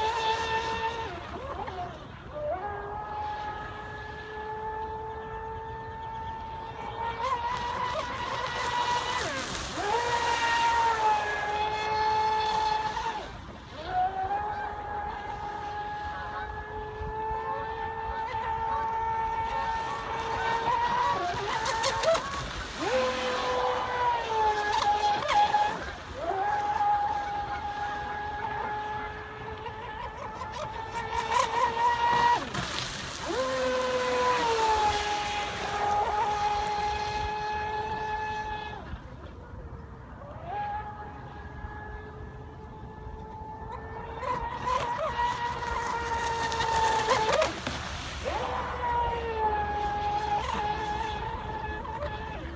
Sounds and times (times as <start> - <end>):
Motorboat, speedboat: 0.0 - 52.5.